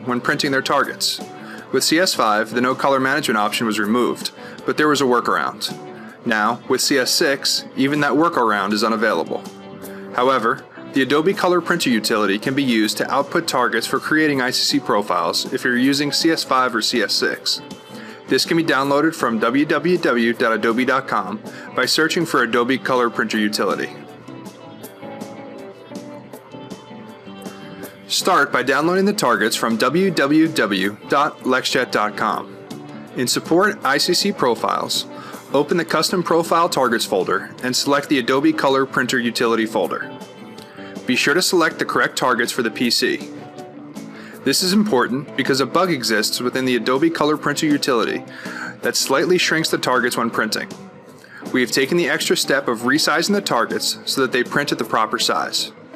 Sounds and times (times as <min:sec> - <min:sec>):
Speech: 0:00.0 - 0:09.5, 0:10.2 - 0:17.6, 0:18.3 - 0:24.0, 0:28.1 - 0:32.5, 0:33.2 - 0:40.1, 0:41.0 - 0:43.3, 0:44.4 - 0:48.2, 0:48.8 - 0:50.8, 0:51.5 - 0:55.8
Music: 0:00.0 - 0:55.9.